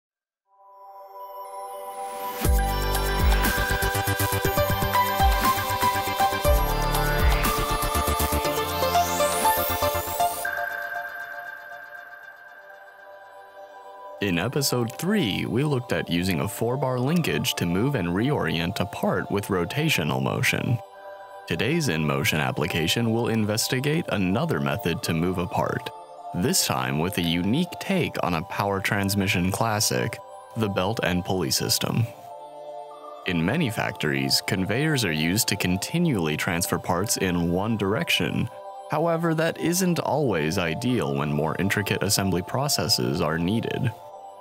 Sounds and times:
Music: 0.5 - 44.4.

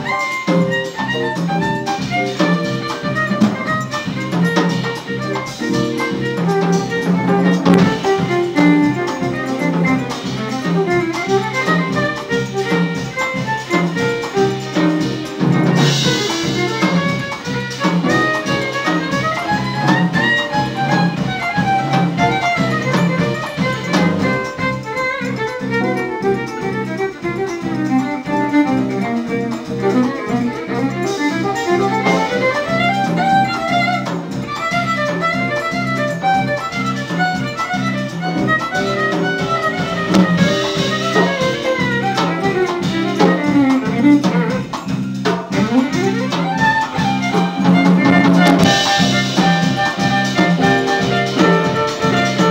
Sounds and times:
Jazz: 0.0 - 52.5
Violin, fiddle: 0.0 - 52.5.

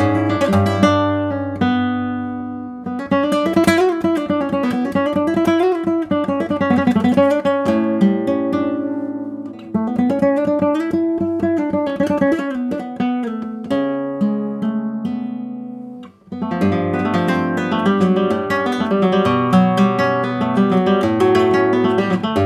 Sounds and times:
Acoustic guitar: 0.0 - 22.4
Strum: 0.0 - 22.4.

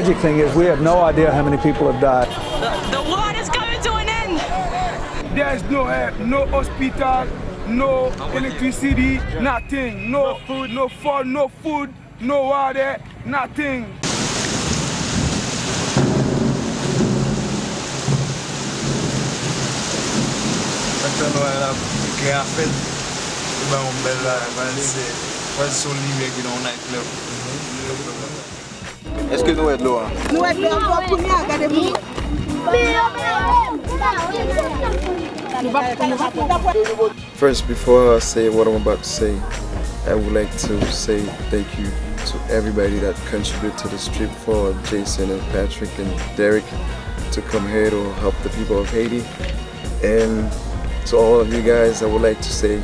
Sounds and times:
Music: 0.0 - 10.1, 28.8 - 52.8.

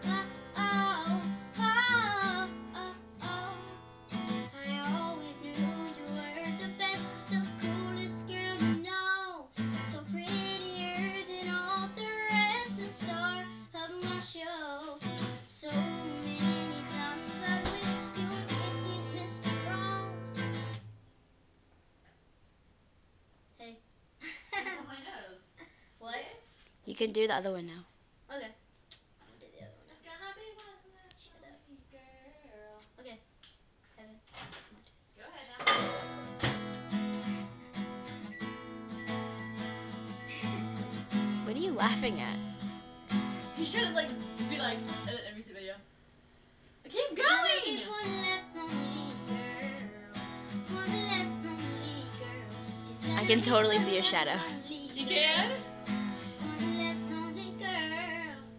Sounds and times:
Child singing: 0.0 - 3.7, 4.5 - 20.2, 46.9 - 55.6, 56.2 - 58.5
Music: 0.0 - 20.8, 35.7 - 45.2, 47.6 - 58.5.

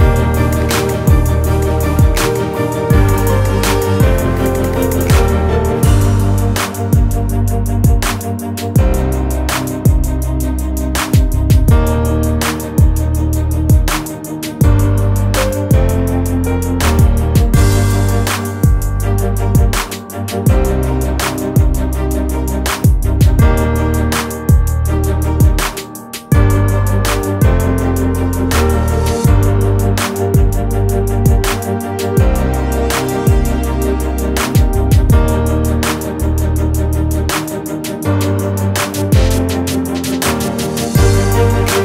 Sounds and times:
Music: 0.0 - 41.8.

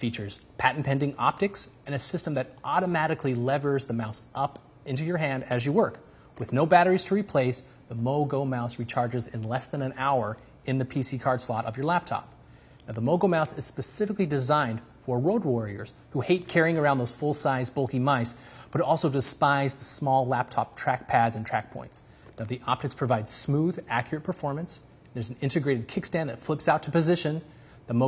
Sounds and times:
Speech: 0.0 - 28.0.

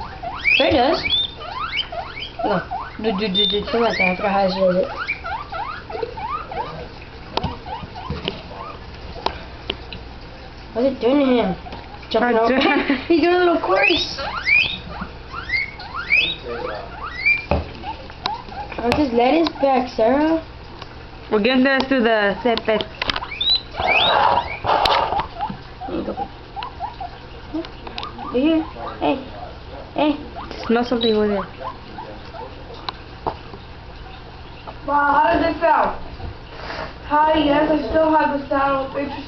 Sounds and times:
Oink: 0.0 - 9.3, 13.8 - 19.9, 23.2 - 29.2, 30.2 - 32.9.

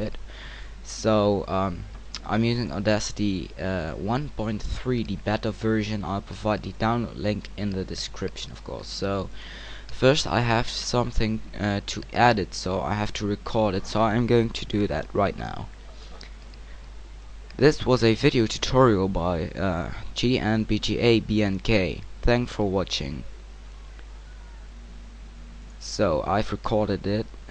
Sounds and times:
Speech: 0.8 - 9.3, 9.9 - 15.7, 17.6 - 23.3, 25.8 - 27.3.

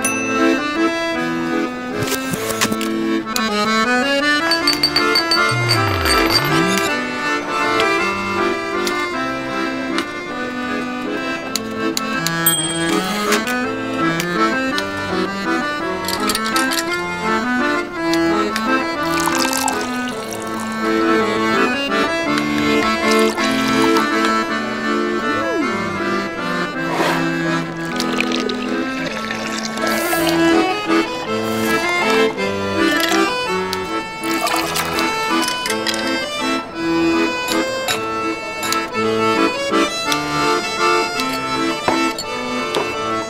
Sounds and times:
Music: 0.0 - 43.3.

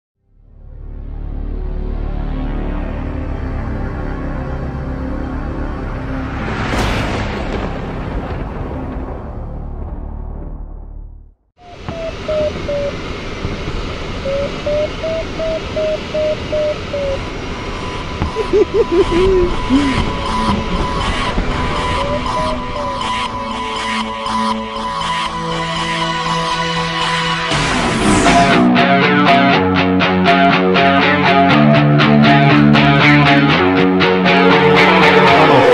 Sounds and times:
Music: 0.2 - 12.8, 18.9 - 35.7.

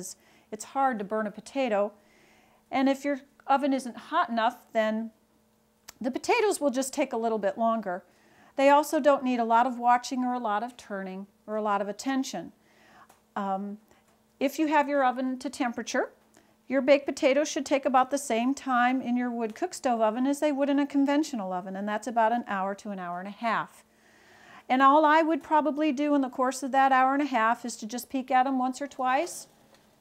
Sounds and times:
Speech: 0.0 - 2.0, 2.7 - 5.2, 5.9 - 8.0, 8.6 - 12.6, 13.4 - 13.8, 14.4 - 23.8, 24.7 - 29.5.

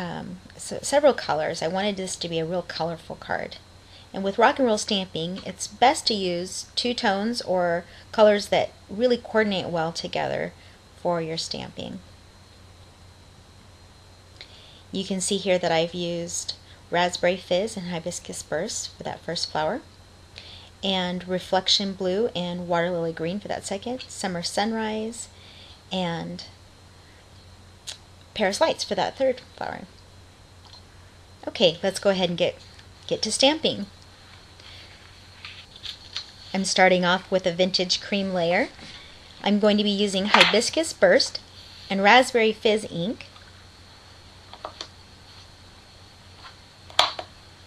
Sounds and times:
Speech: 0.0 - 12.0, 15.0 - 19.9, 20.8 - 25.3, 25.9 - 26.6, 28.4 - 29.9, 31.4 - 33.9, 36.5 - 38.8, 39.4 - 43.3.

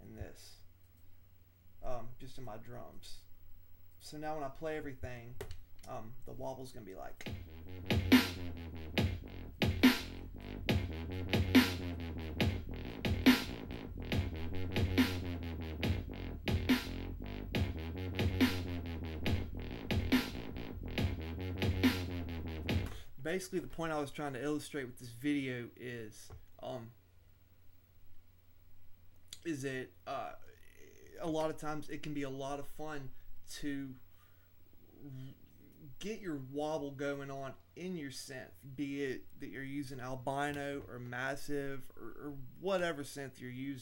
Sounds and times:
Speech: 0.0 - 0.7, 1.8 - 3.3, 4.0 - 7.3, 23.2 - 27.0, 29.4 - 34.0, 35.0 - 43.8
Dubstep: 7.2 - 23.0.

